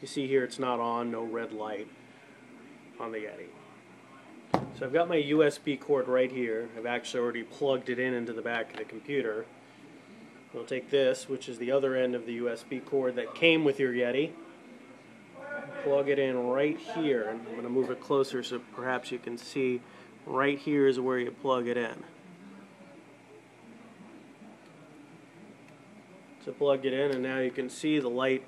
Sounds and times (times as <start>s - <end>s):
Speech: 0.0s - 2.0s, 2.9s - 9.6s, 10.5s - 23.0s, 23.6s - 28.4s.